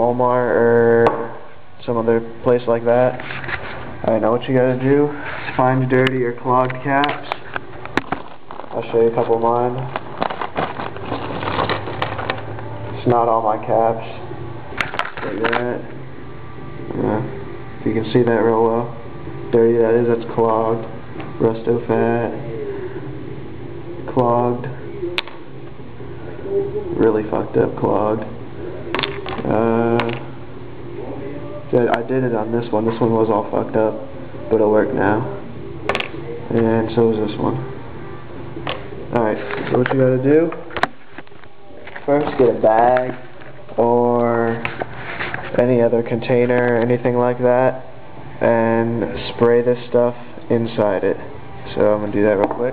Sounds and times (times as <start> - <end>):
Speech: 0.0 - 3.2, 4.0 - 7.4, 8.7 - 9.9, 13.0 - 14.3, 31.1 - 35.4, 42.0 - 43.2, 43.8 - 44.7, 45.5 - 47.8.